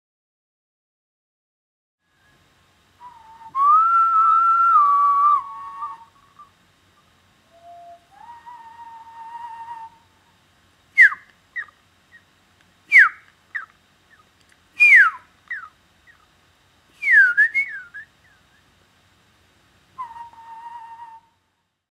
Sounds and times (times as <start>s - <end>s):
Whistling: 3.0s - 6.5s, 7.4s - 10.2s, 11.0s - 12.2s, 12.9s - 14.2s, 14.8s - 16.2s, 17.0s - 18.6s, 20.0s - 21.5s.